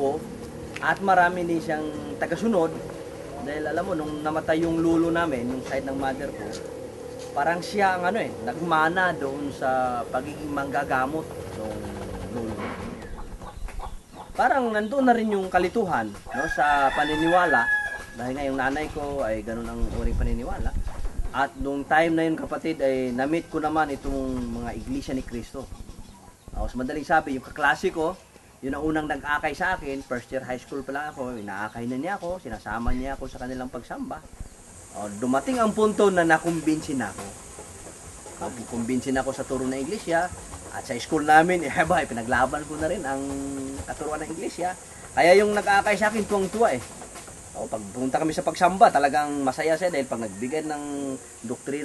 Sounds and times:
Speech: 0:00.0 - 0:06.6, 0:07.4 - 0:13.0, 0:14.4 - 0:20.8, 0:21.4 - 0:25.8, 0:26.6 - 0:34.3, 0:35.0 - 0:37.3, 0:38.4 - 0:46.9, 0:47.6 - 0:51.8.

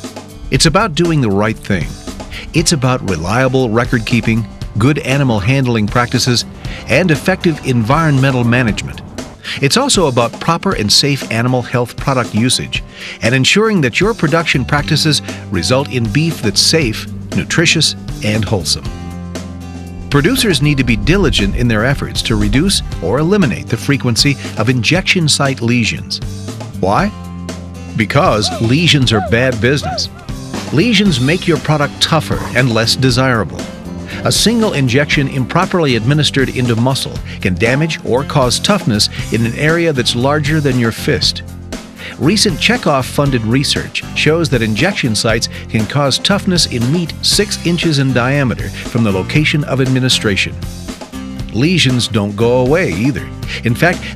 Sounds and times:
Music: 0:00.0 - 0:54.1
Speech: 0:00.5 - 0:18.9, 0:20.1 - 0:26.2, 0:26.8 - 0:27.2, 0:28.0 - 0:41.4, 0:42.1 - 0:50.6, 0:51.5 - 0:54.1.

